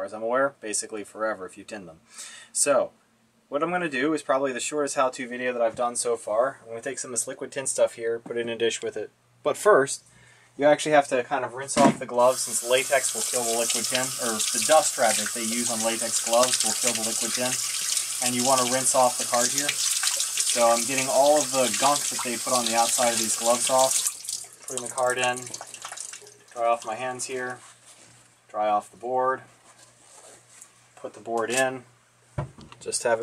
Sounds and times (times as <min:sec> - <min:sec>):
Speech: 0:00.0 - 0:02.0, 0:02.6 - 0:10.0, 0:10.6 - 0:17.6, 0:18.2 - 0:19.8, 0:20.5 - 0:24.0, 0:24.7 - 0:25.5, 0:26.6 - 0:27.6, 0:28.5 - 0:29.5, 0:31.0 - 0:31.9, 0:32.8 - 0:33.2.